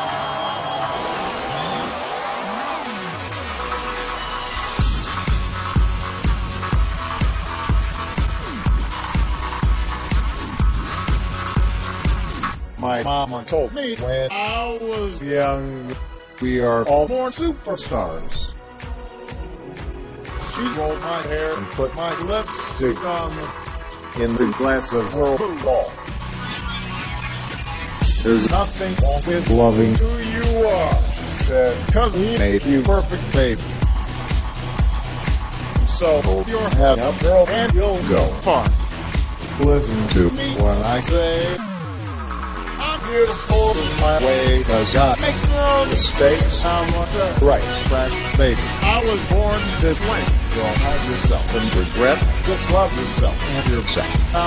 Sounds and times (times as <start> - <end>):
Music: 0.0 - 54.4
Speech: 20.4 - 23.5.